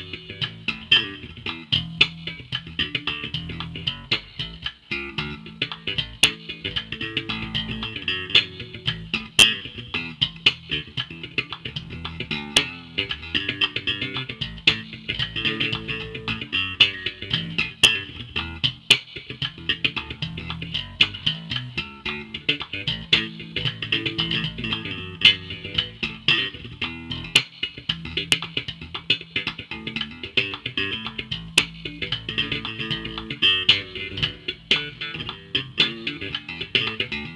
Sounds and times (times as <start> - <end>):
Guitar: 0.0 - 37.3.